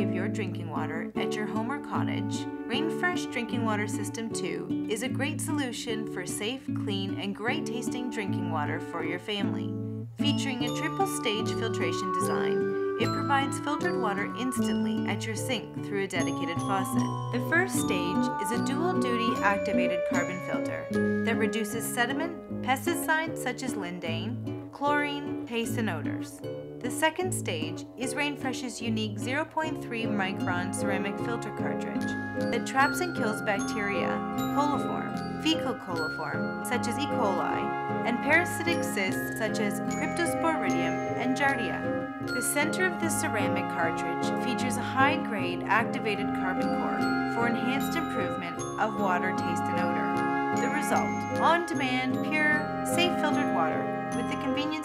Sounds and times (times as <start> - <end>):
Speech: 0.0 - 41.8, 42.4 - 54.8
Music: 0.0 - 54.8.